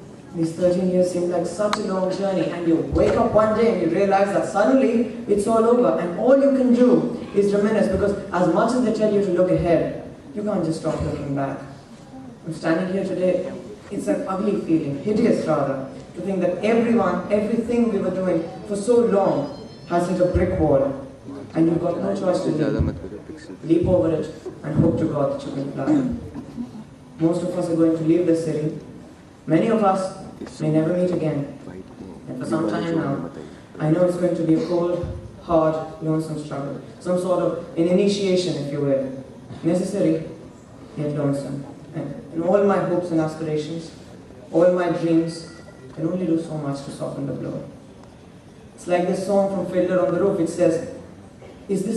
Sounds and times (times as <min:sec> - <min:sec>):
Male speech, man speaking: 0:00.0 - 0:11.8, 0:12.4 - 0:26.2, 0:27.2 - 0:28.8, 0:29.5 - 0:40.4, 0:41.0 - 0:47.7, 0:48.8 - 0:51.0, 0:51.7 - 0:51.9
Narration, monologue: 0:00.0 - 0:51.9.